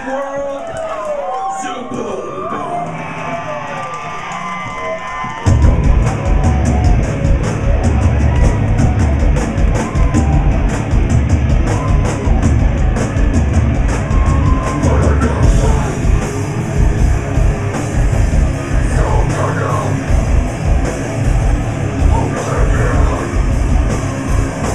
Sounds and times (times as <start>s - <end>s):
Music: 1.9s - 24.7s.